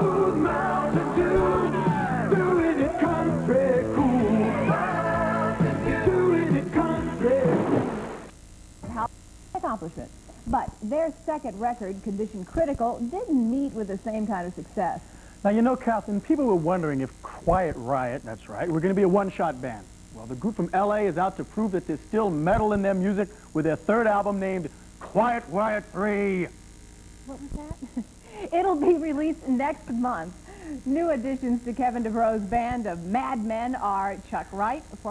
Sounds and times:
Speech: 0:08.9 - 0:26.5, 0:27.3 - 0:30.3.

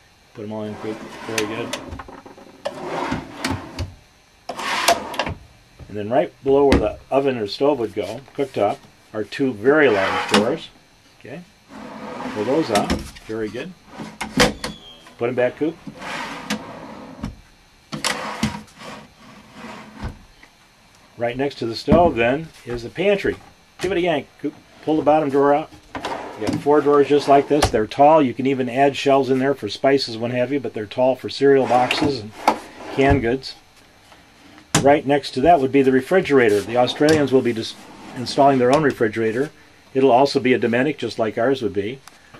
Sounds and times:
Speech: 0:00.3 - 0:01.8, 0:05.9 - 0:11.5, 0:12.3 - 0:13.8, 0:15.2 - 0:15.8, 0:21.2 - 0:25.7, 0:26.4 - 0:33.6, 0:34.8 - 0:42.0.

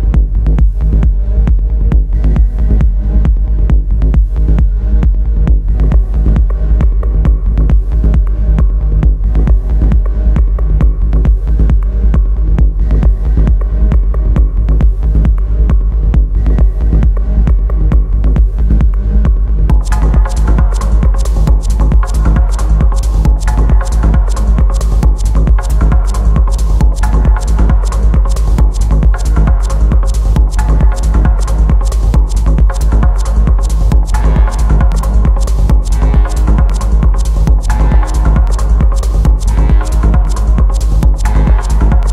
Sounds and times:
Music: 0:00.0 - 0:42.1.

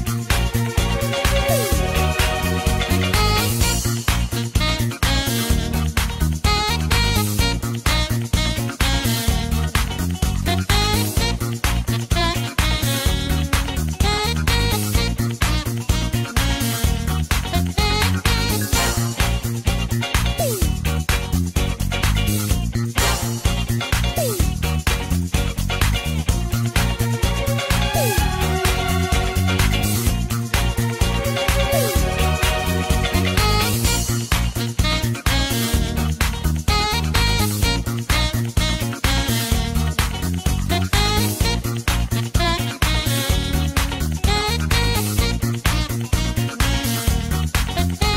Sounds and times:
Disco: 0:00.0 - 0:48.1.

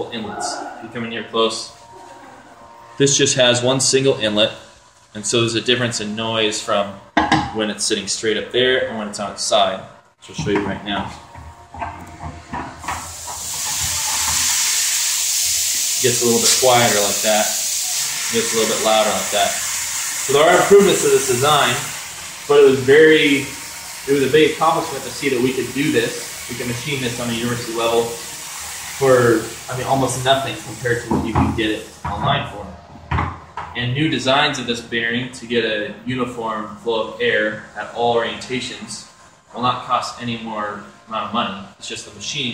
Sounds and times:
Speech: 0:00.0 - 0:01.7, 0:03.0 - 0:04.6, 0:05.2 - 0:11.2, 0:16.0 - 0:17.6, 0:18.3 - 0:19.7, 0:20.3 - 0:21.9, 0:22.5 - 0:28.2, 0:29.0 - 0:32.8, 0:33.8 - 0:42.5.

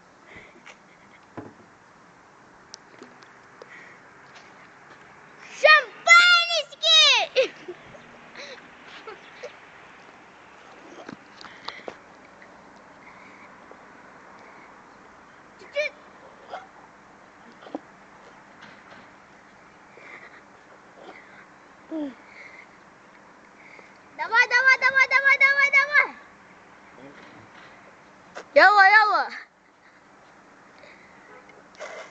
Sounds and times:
Outside, urban or manmade: 0:00.0 - 0:32.1.

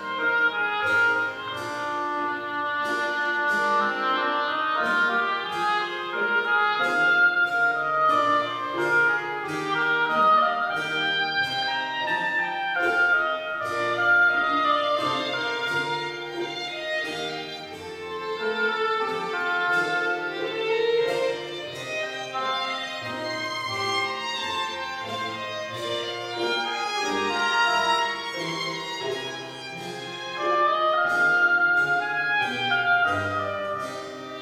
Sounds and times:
Violin, fiddle: 0:00.0 - 0:34.4.

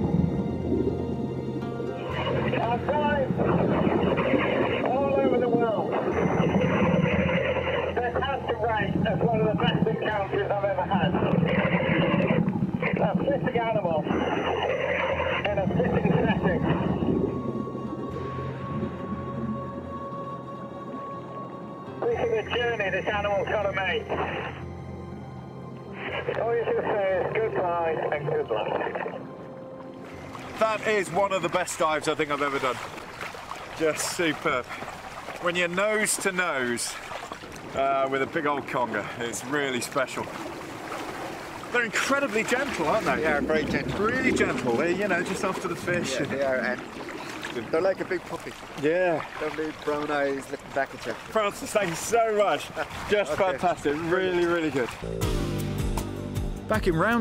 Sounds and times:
Music: 0:00.0 - 0:11.8, 0:13.7 - 0:32.1, 0:53.2 - 0:57.2.

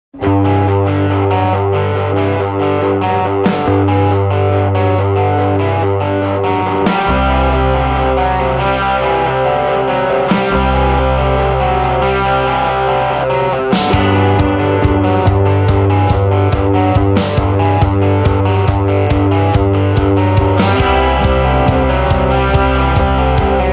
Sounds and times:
Effects unit: 0:00.1 - 0:23.7
Electric guitar: 0:00.1 - 0:23.7.

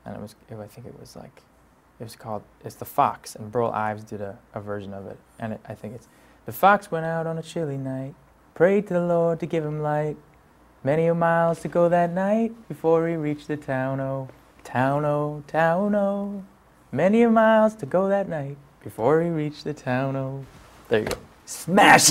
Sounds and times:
Male singing: 0:10.9 - 0:20.4.

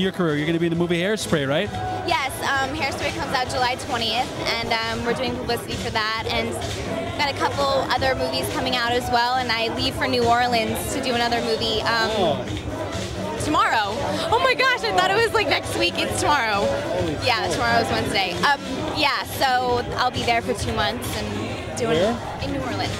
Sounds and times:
Music: 0:00.0 - 0:22.9.

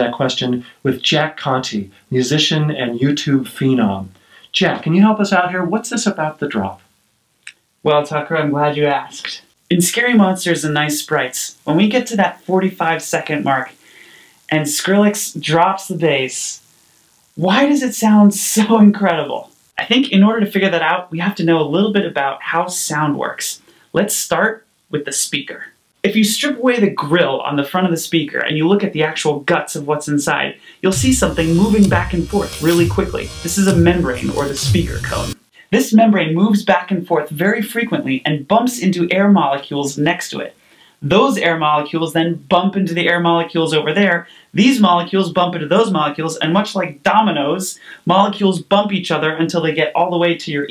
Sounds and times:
Speech: 0:00.0 - 0:06.9, 0:07.8 - 0:13.8, 0:14.5 - 0:16.6, 0:17.4 - 0:50.7.

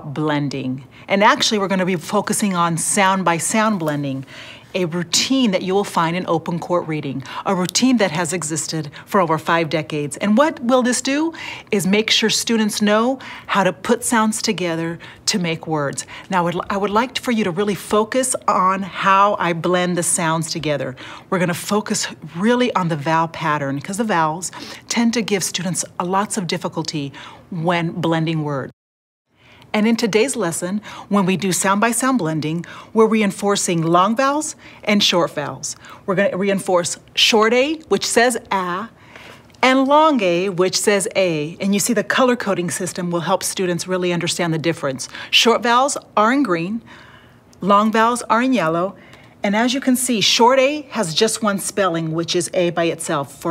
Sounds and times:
Speech: 0:00.0 - 0:28.7, 0:29.8 - 0:38.9, 0:39.6 - 0:46.8, 0:47.6 - 0:53.5.

